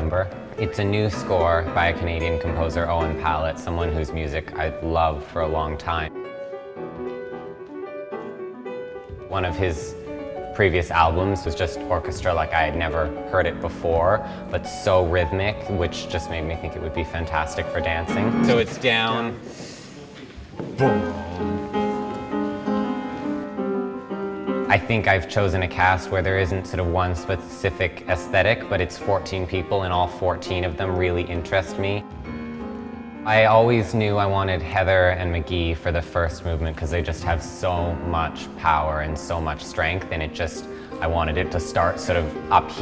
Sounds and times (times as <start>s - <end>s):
Speech: 0.0s - 6.1s, 9.3s - 10.0s, 10.6s - 19.4s, 24.7s - 32.0s, 33.3s - 42.8s
Music: 0.0s - 42.8s.